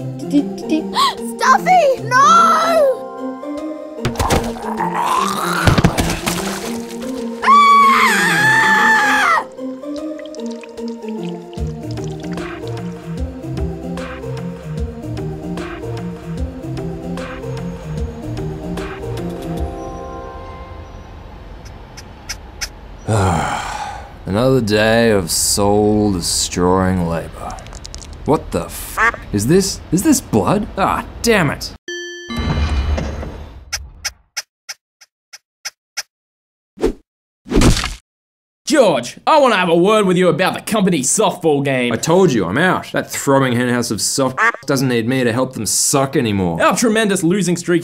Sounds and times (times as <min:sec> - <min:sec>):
Music: 0:00.0 - 0:04.8, 0:06.0 - 0:21.2.